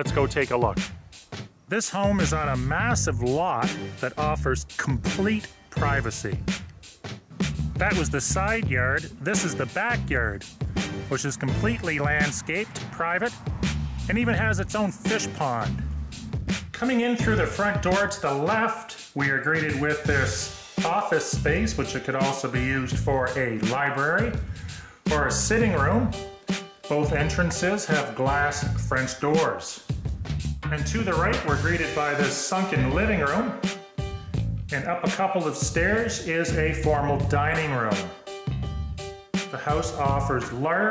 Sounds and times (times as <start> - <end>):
Speech: 0.0 - 0.8, 1.7 - 6.5, 7.8 - 10.5, 11.1 - 13.4, 14.1 - 15.8, 16.8 - 24.4, 25.1 - 26.2, 26.9 - 29.9, 30.7 - 33.7, 34.7 - 38.2, 39.5 - 40.9
Music: 0.0 - 40.9.